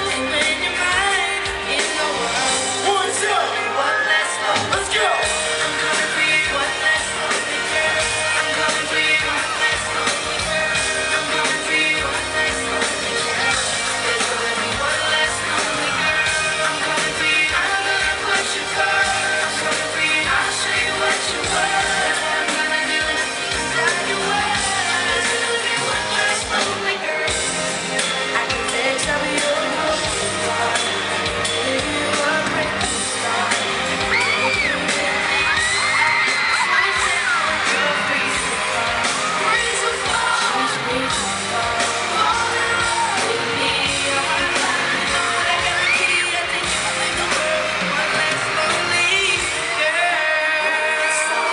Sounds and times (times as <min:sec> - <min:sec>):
Male singing: 0:00.0 - 0:27.6, 0:28.3 - 0:51.5
Music: 0:00.0 - 0:51.5.